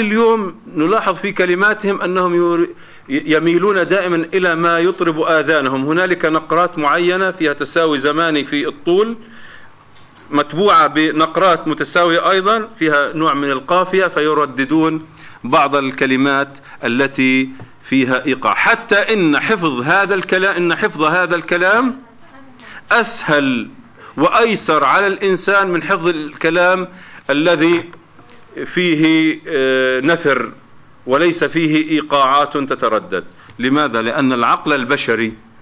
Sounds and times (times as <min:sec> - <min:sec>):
Speech: 0:00.0 - 0:09.2, 0:10.3 - 0:35.4.